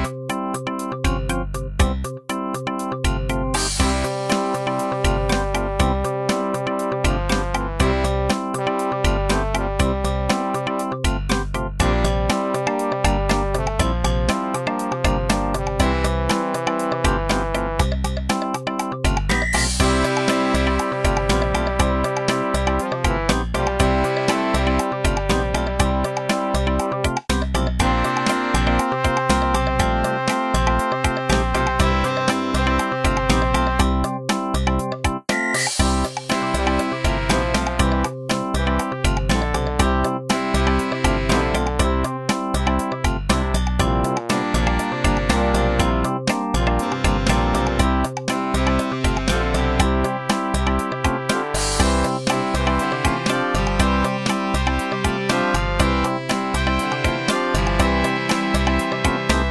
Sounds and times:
Music: 0.0 - 59.5.

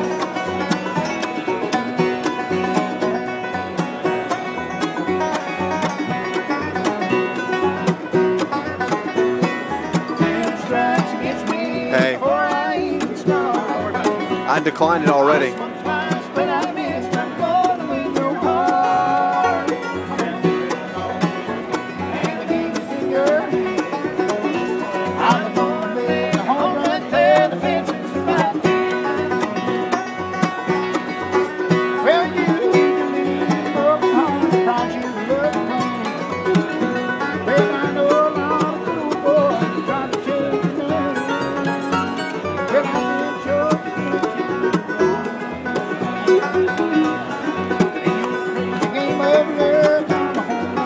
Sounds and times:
Music: 0.0 - 50.8
Speech: 11.9 - 12.2, 13.6 - 15.7.

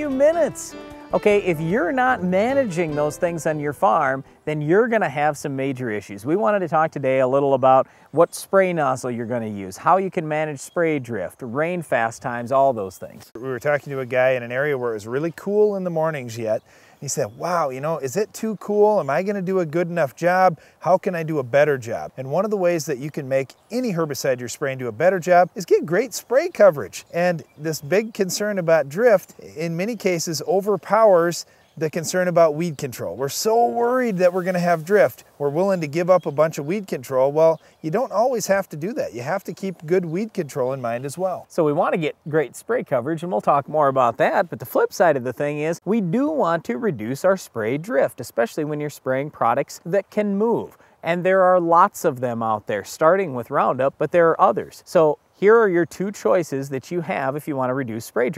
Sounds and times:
Speech: 0.0 - 58.3.

